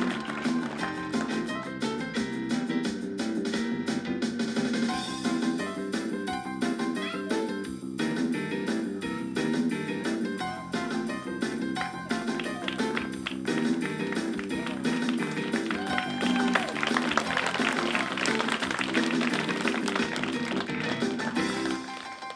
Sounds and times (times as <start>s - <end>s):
Music: 0.0s - 22.3s.